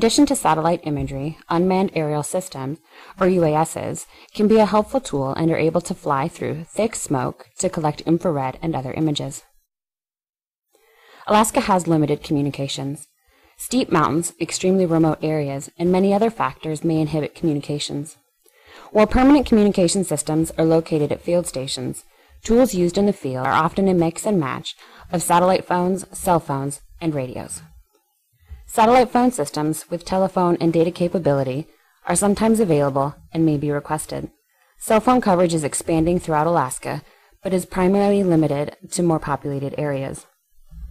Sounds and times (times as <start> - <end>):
Speech: 0.0 - 9.4, 11.3 - 13.0, 13.6 - 18.1, 18.9 - 27.7, 28.7 - 40.3.